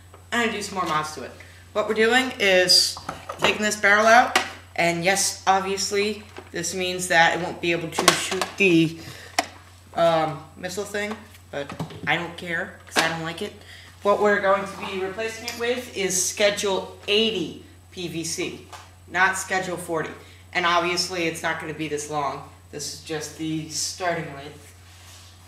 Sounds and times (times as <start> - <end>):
Speech: 0.3 - 9.0, 10.0 - 24.7.